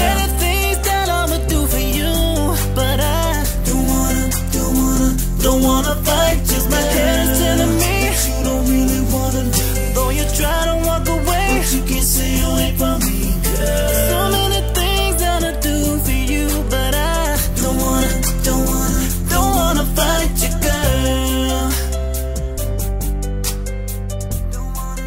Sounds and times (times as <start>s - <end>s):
Rhythm and blues: 0.0s - 25.0s.